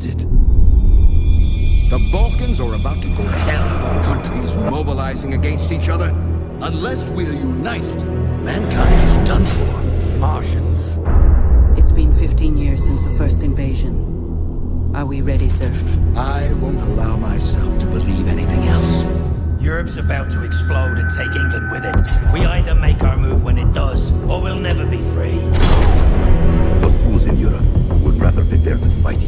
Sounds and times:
Music: 0:00.0 - 0:29.2
Speech: 0:11.8 - 0:14.0, 0:15.0 - 0:25.5, 0:26.8 - 0:29.2.

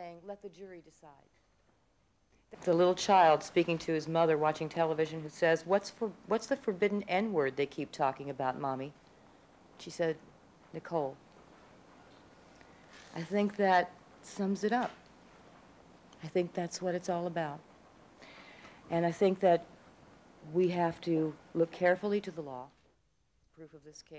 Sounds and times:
Female speech, woman speaking: 0:00.0 - 0:01.3, 0:02.6 - 0:09.0, 0:09.8 - 0:10.2, 0:10.8 - 0:11.2, 0:13.1 - 0:15.0, 0:16.2 - 0:17.6, 0:18.9 - 0:19.7, 0:20.5 - 0:22.8, 0:23.5 - 0:24.1.

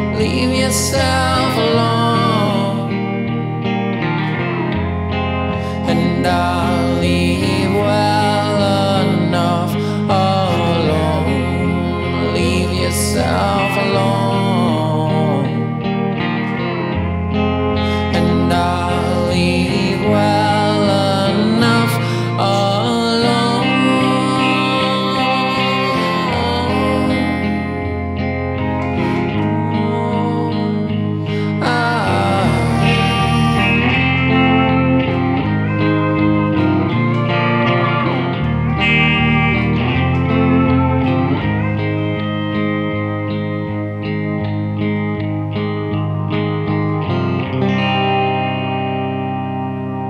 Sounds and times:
Distortion: 0:00.0 - 0:50.1
Effects unit: 0:00.0 - 0:50.1
Electric guitar: 0:00.0 - 0:50.1.

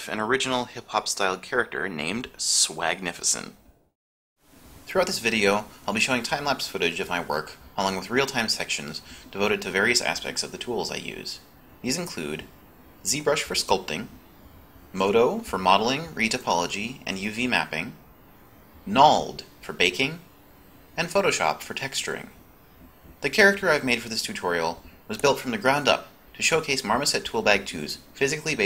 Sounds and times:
Speech: 0:00.0 - 0:03.6, 0:04.9 - 0:14.2, 0:14.9 - 0:18.0, 0:18.8 - 0:20.3, 0:21.0 - 0:22.4, 0:23.2 - 0:28.6.

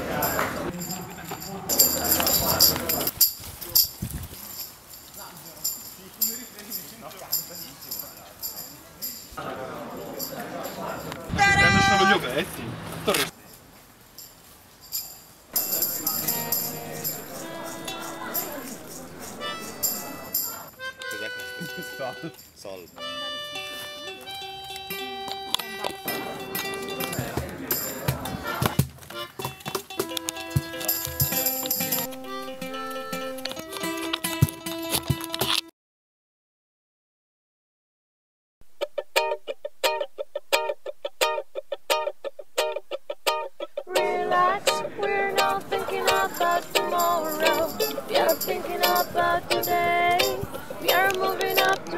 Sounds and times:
Speech: 0:00.0 - 0:04.0, 0:05.2 - 0:13.6, 0:15.6 - 0:23.0, 0:24.2 - 0:28.8, 0:43.9 - 0:51.9
Music: 0:15.6 - 0:22.4, 0:23.0 - 0:35.7, 0:38.8 - 0:51.9.

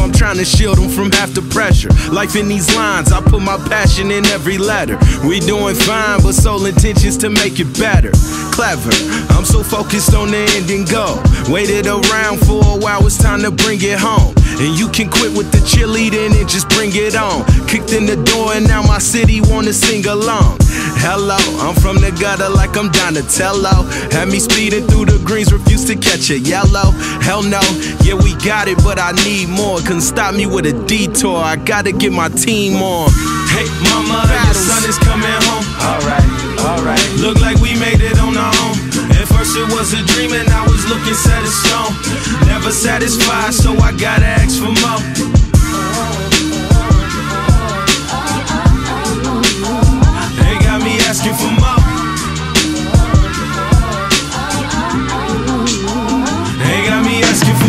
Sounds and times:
Rapping: 0:00.0 - 0:57.6.

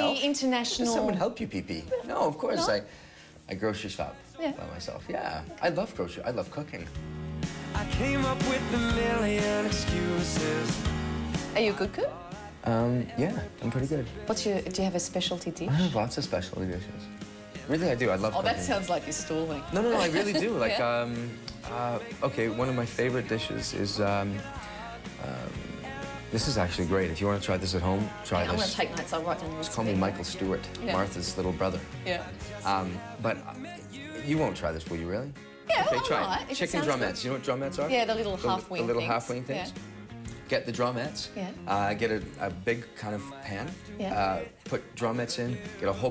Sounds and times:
Music: 0:00.0 - 0:46.1.

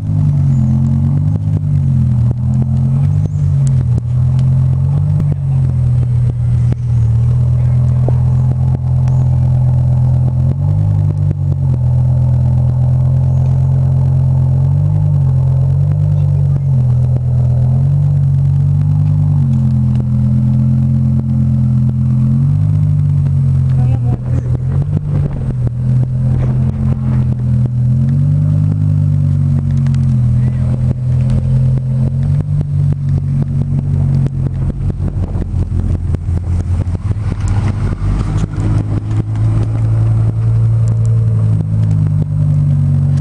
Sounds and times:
Speech: 0:05.2 - 0:05.8, 0:07.5 - 0:08.2, 0:16.1 - 0:16.8, 0:23.7 - 0:24.6, 0:30.3 - 0:30.8.

